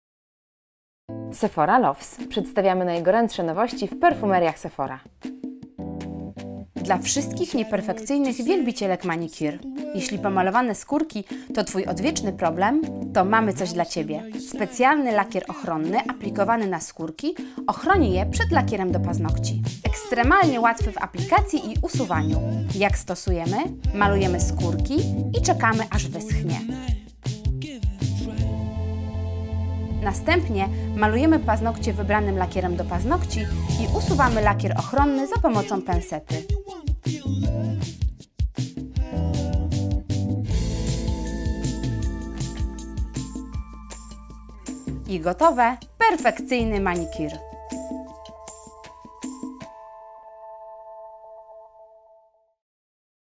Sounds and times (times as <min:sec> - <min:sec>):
Music: 0:01.1 - 0:52.6
Speech: 0:01.4 - 0:05.1, 0:06.8 - 0:26.8, 0:30.0 - 0:36.7, 0:45.1 - 0:47.4.